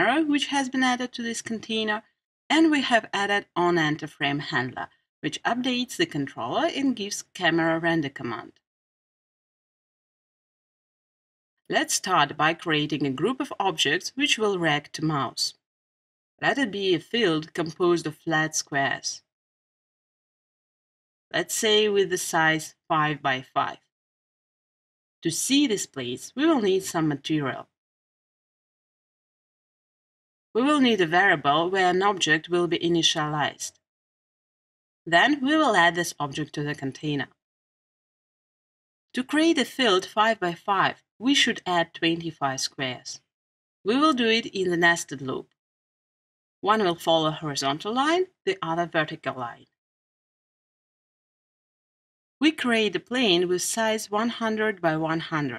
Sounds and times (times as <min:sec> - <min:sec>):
Speech: 0:00.0 - 0:08.6, 0:11.7 - 0:15.6, 0:16.4 - 0:19.3, 0:21.4 - 0:23.8, 0:25.2 - 0:27.7, 0:30.6 - 0:33.8, 0:35.1 - 0:37.4, 0:39.2 - 0:43.2, 0:43.9 - 0:45.5, 0:46.7 - 0:49.7, 0:52.4 - 0:55.5.